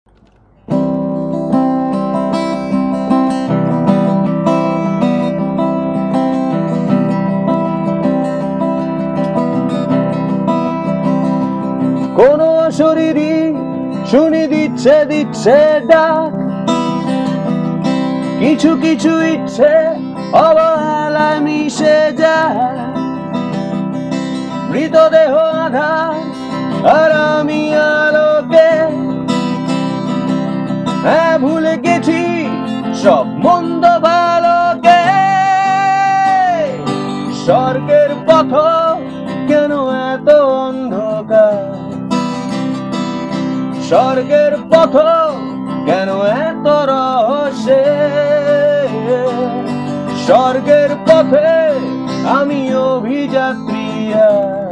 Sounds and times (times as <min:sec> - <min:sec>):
Acoustic guitar: 0:00.1 - 0:54.7.